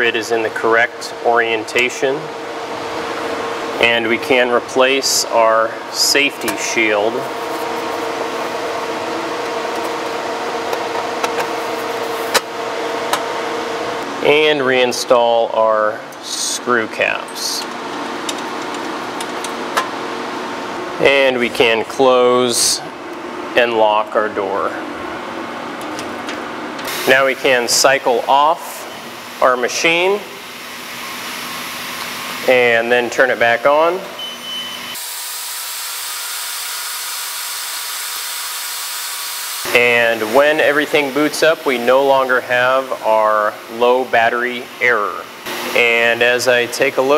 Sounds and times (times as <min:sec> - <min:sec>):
Speech: 0:00.0 - 0:02.3, 0:03.8 - 0:07.3, 0:14.2 - 0:17.7, 0:21.0 - 0:22.9, 0:23.6 - 0:24.8, 0:27.1 - 0:30.4, 0:32.5 - 0:34.2, 0:39.7 - 0:47.1.